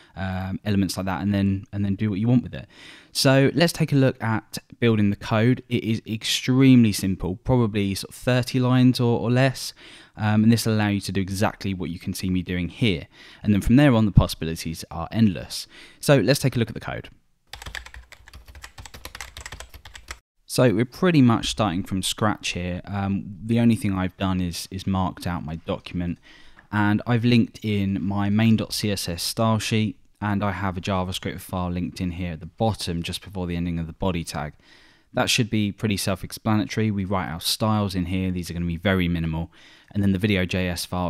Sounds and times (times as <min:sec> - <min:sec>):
Speech: 0:00.2 - 0:17.2, 0:20.5 - 0:34.6, 0:35.2 - 0:41.0
Computer keyboard: 0:17.5 - 0:20.2.